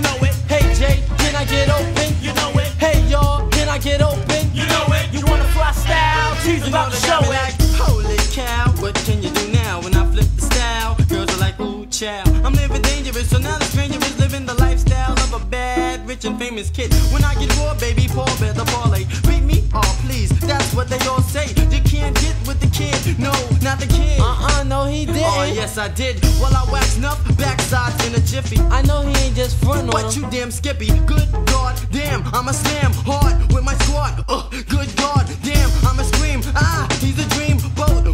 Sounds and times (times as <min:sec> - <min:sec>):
Music: 0:00.0 - 0:38.1
Rapping: 0:00.0 - 0:38.1.